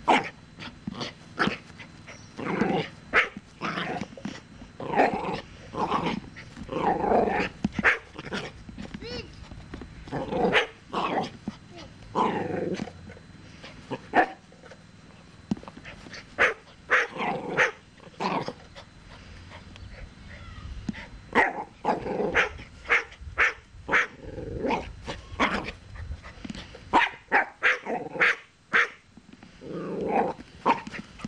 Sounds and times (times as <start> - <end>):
Bark: 3.2 - 3.4, 7.8 - 8.1, 16.4 - 17.8, 22.3 - 24.2, 27.0 - 29.0.